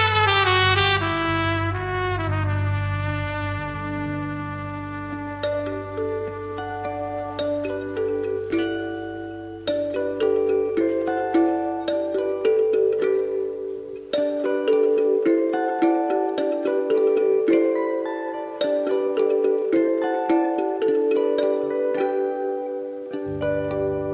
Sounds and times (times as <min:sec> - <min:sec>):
Marimba, xylophone: 0:04.1 - 0:24.1
Glockenspiel: 0:04.5 - 0:24.1.